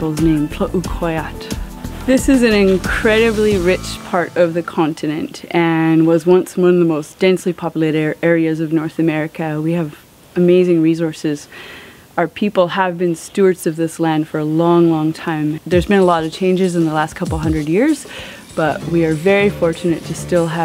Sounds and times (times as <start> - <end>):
Speech: 0.0 - 1.5, 2.1 - 11.5, 12.2 - 20.6
Music: 0.0 - 6.0, 15.7 - 20.6.